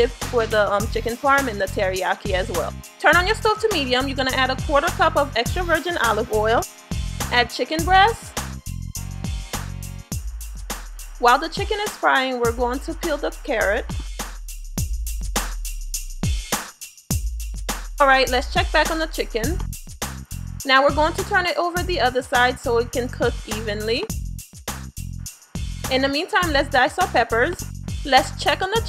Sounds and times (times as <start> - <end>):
Speech: 0.0 - 6.6, 7.3 - 8.3, 11.2 - 13.9, 18.0 - 19.6, 20.7 - 24.1, 25.9 - 28.8
Music: 0.0 - 28.8.